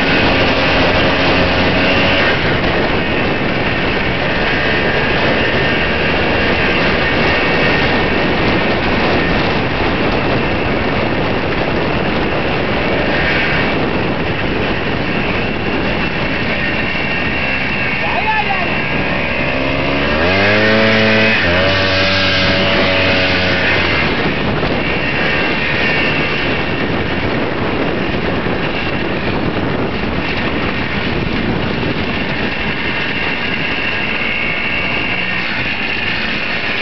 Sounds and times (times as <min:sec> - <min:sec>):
Motorcycle: 0:00.0 - 0:36.8.